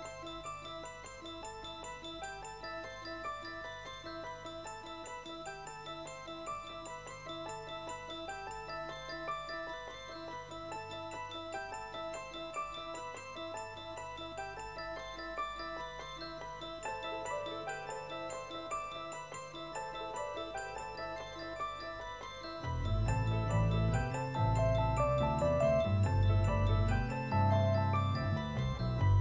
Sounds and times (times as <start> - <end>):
Music: 0.0 - 29.2.